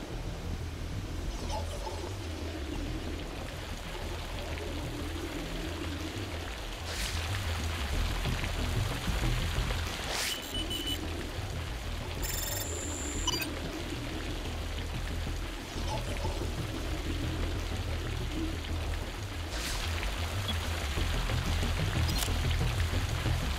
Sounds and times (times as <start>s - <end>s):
Music: 0.0s - 23.5s
Raindrop: 0.0s - 23.5s.